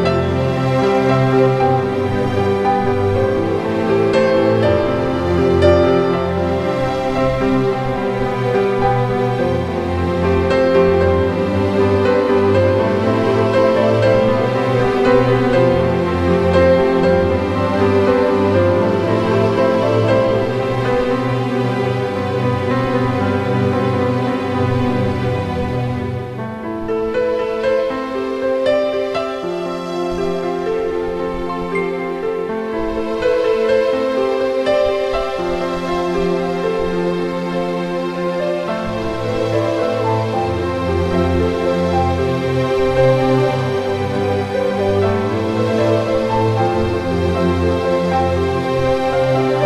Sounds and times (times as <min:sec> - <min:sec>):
Music: 0:00.0 - 0:49.6.